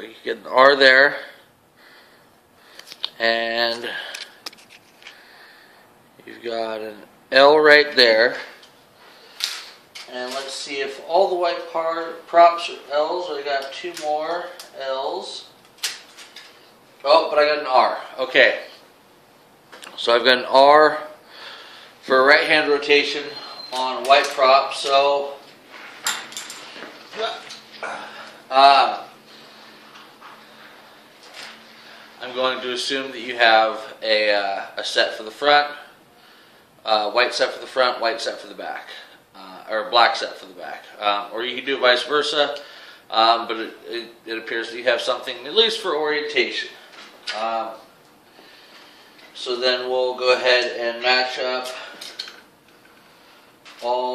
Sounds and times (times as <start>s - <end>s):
Speech: 0.0s - 1.4s, 3.2s - 4.1s, 6.2s - 8.6s, 10.1s - 15.5s, 17.0s - 18.8s, 20.0s - 21.2s, 22.1s - 25.4s, 27.1s - 27.5s, 28.5s - 29.1s, 32.2s - 35.9s, 36.8s - 47.9s, 49.4s - 52.0s, 53.8s - 54.1s.